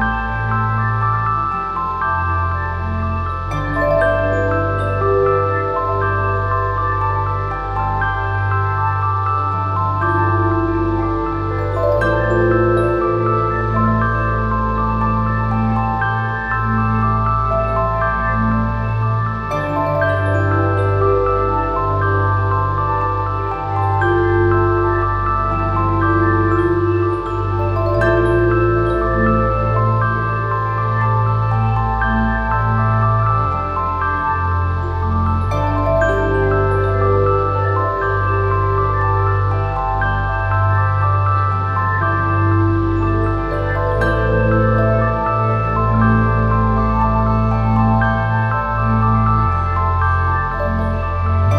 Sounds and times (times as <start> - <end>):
Ambient music: 0.0 - 51.5.